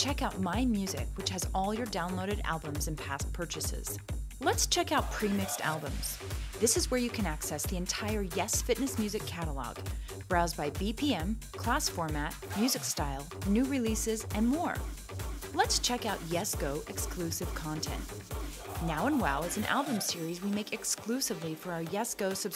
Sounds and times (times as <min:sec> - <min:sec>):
Speech: 0:00.0 - 0:14.9, 0:15.6 - 0:18.1, 0:18.8 - 0:22.5
Soundtrack music: 0:05.0 - 0:06.6, 0:12.4 - 0:20.8.